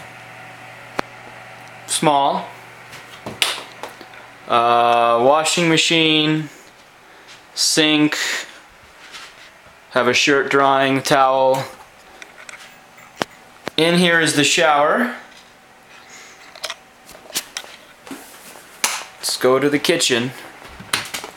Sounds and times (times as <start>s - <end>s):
Speech: 1.9s - 2.6s, 4.5s - 6.6s, 7.6s - 8.6s, 9.9s - 11.8s, 13.8s - 15.3s, 19.2s - 20.5s.